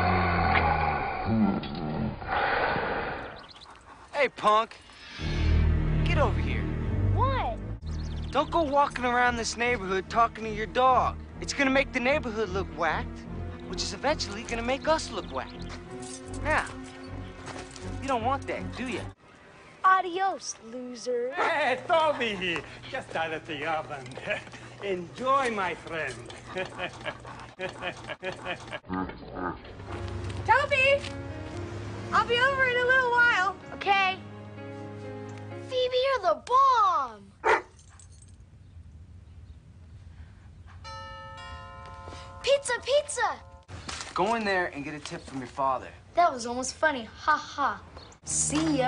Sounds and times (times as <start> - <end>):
Music: 5.0 - 21.1, 29.7 - 36.8, 48.2 - 48.8.